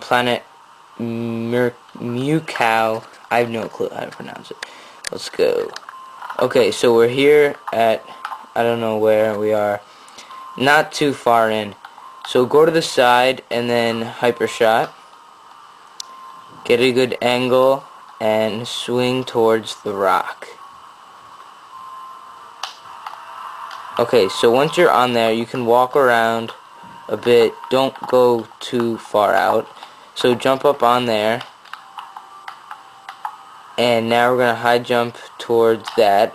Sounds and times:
Speech: 0:01.0 - 0:05.8, 0:06.4 - 0:09.8, 0:10.6 - 0:14.9, 0:16.6 - 0:20.6, 0:24.0 - 0:31.5, 0:33.8 - 0:36.3.

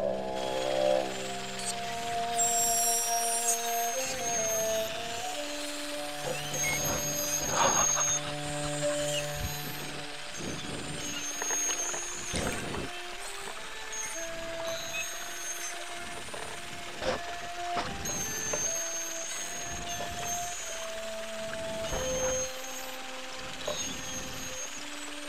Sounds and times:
Music: 0:00.0 - 0:25.2.

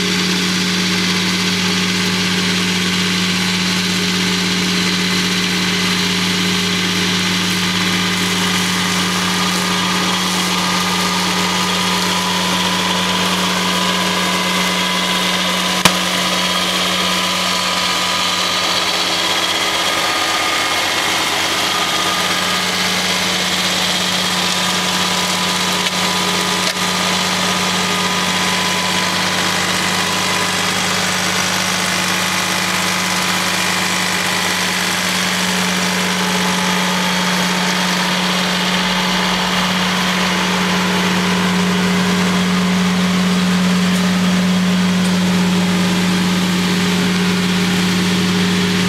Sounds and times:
Power tool: 0:00.0 - 0:48.8.

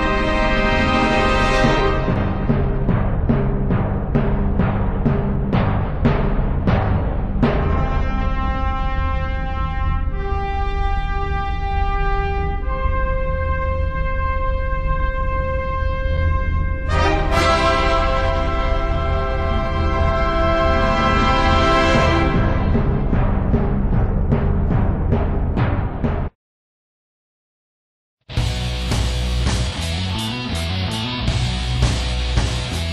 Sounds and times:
Music: 0:00.0 - 0:26.4, 0:28.3 - 0:32.9.

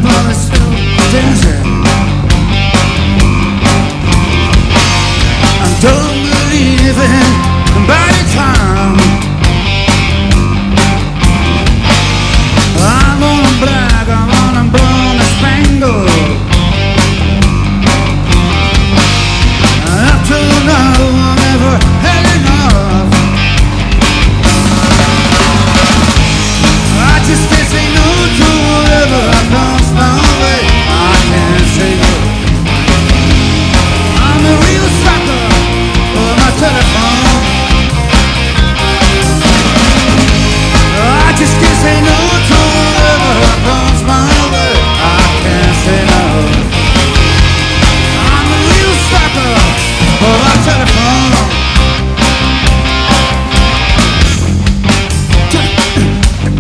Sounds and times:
Music: 0:00.0 - 0:56.6.

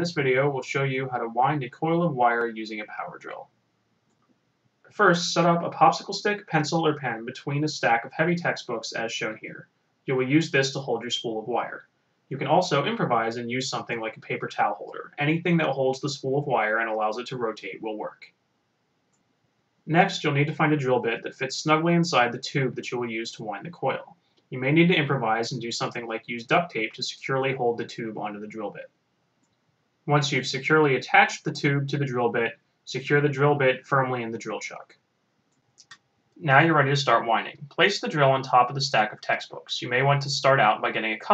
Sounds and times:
Speech: 0:00.0 - 0:03.4, 0:05.0 - 0:18.3, 0:19.9 - 0:28.9, 0:30.1 - 0:34.9, 0:36.4 - 0:41.3.

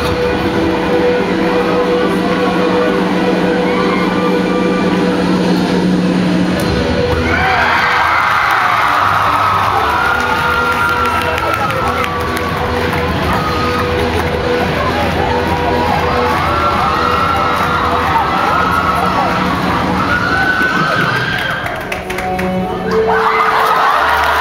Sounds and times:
Crowd: 0:00.0 - 0:24.4
Cheering: 0:07.2 - 0:22.1, 0:22.8 - 0:24.4.

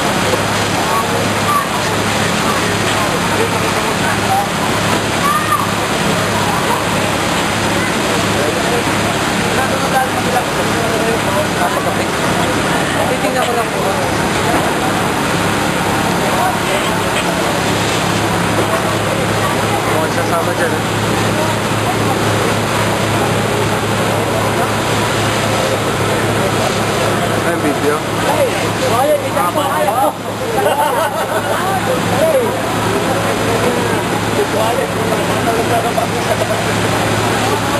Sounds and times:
Hubbub, speech noise, speech babble: 0:00.0 - 0:37.7
Speech: 0:00.0 - 0:37.7.

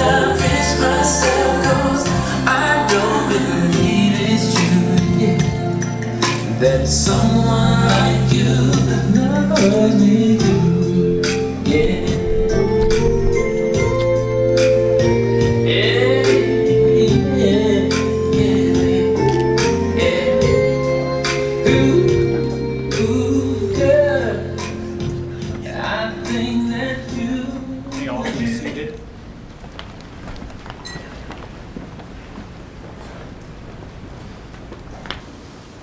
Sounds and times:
Vocal music: 0:00.0 - 0:29.4.

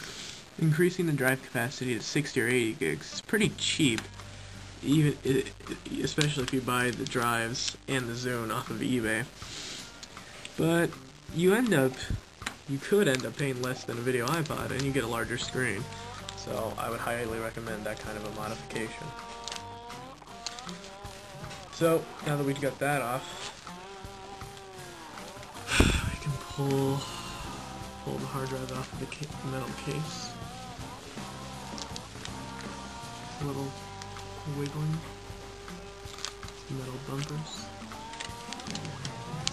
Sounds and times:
Speech: 0:00.6 - 0:04.1, 0:04.8 - 0:09.3, 0:10.6 - 0:19.1, 0:21.8 - 0:23.5, 0:26.0 - 0:27.2, 0:28.1 - 0:30.3, 0:33.4 - 0:33.8, 0:34.5 - 0:35.1, 0:36.7 - 0:37.7.

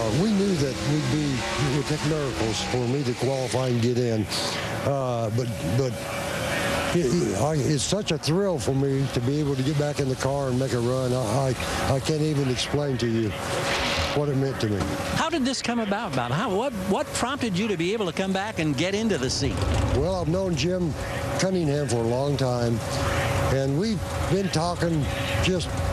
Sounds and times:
Speech: 0:00.0 - 0:06.0, 0:06.8 - 0:13.4, 0:20.0 - 0:22.9, 0:23.5 - 0:25.7.

